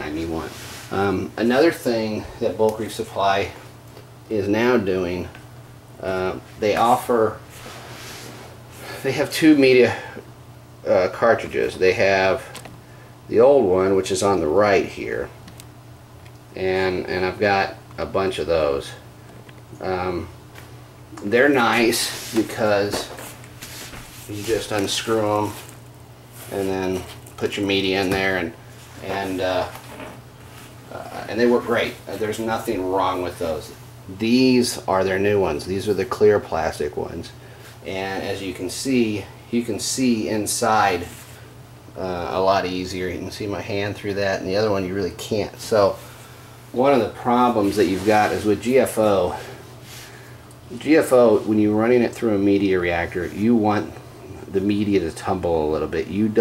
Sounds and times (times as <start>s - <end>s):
Speech: 0.0s - 3.6s, 4.3s - 5.4s, 6.0s - 7.4s, 8.9s - 10.2s, 10.8s - 12.6s, 13.3s - 15.4s, 16.6s - 19.0s, 19.8s - 20.4s, 21.2s - 23.2s, 24.3s - 25.6s, 26.5s - 29.8s, 30.9s - 41.2s, 42.0s - 46.0s, 46.7s - 49.6s, 50.7s - 56.4s.